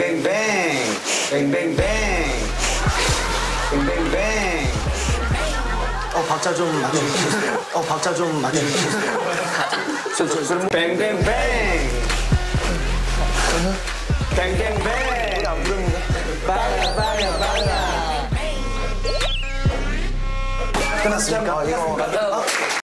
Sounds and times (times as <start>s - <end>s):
Music: 0.0s - 9.0s, 10.8s - 22.8s
Speech: 20.8s - 22.6s.